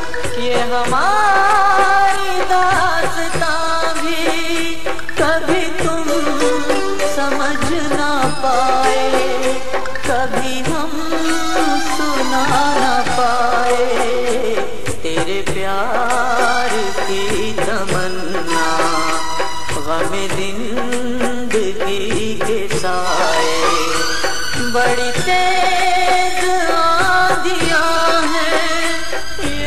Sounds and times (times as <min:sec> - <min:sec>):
Middle Eastern music: 0:00.0 - 0:29.6
Singing: 0:00.0 - 0:29.6.